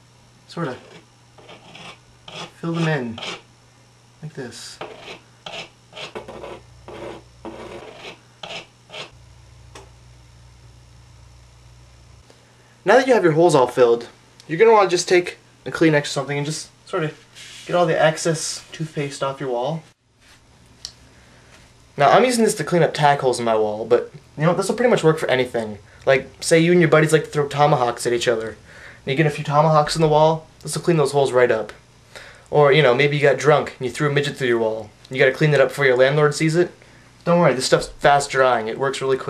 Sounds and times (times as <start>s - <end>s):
Speech: 0.5s - 1.0s, 2.6s - 3.2s, 4.2s - 4.8s, 12.8s - 19.9s, 22.0s - 31.8s, 32.5s - 39.2s.